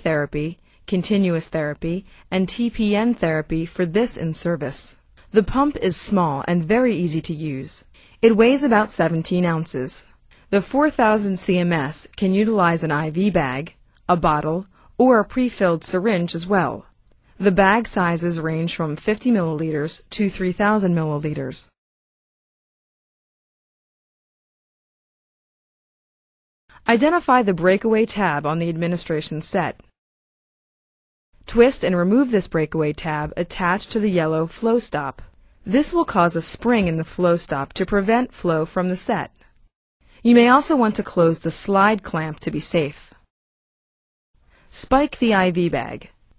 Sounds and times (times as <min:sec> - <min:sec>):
Speech: 0:00.0 - 0:21.8, 0:26.8 - 0:29.9, 0:31.5 - 0:39.4, 0:40.2 - 0:43.2, 0:44.7 - 0:46.2.